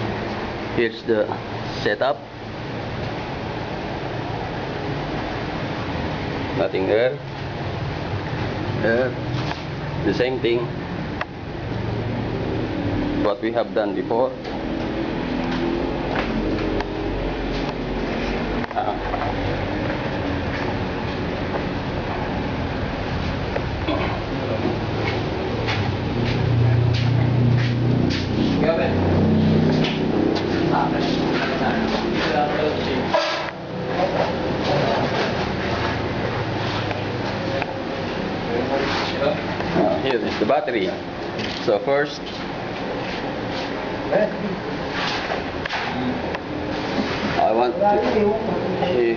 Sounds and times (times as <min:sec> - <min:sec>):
Vehicle: 0:00.0 - 0:49.1.